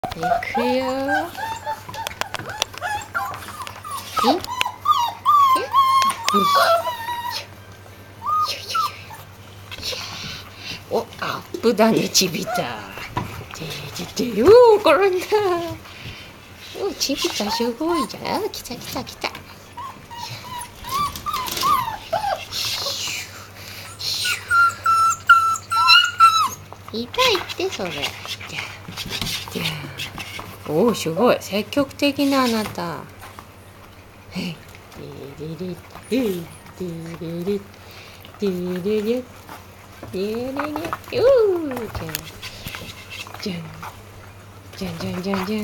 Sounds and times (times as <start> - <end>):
Speech: 0.0 - 1.3, 4.2 - 4.5, 10.9 - 15.8, 16.8 - 19.4, 26.9 - 28.2, 30.7 - 33.1, 34.3 - 37.7, 38.4 - 39.3, 40.1 - 42.4, 43.4 - 43.9, 44.8 - 45.6
Whimper (dog): 0.0 - 7.6, 8.2 - 9.3, 17.1 - 18.3, 19.8 - 23.1, 23.8 - 26.6.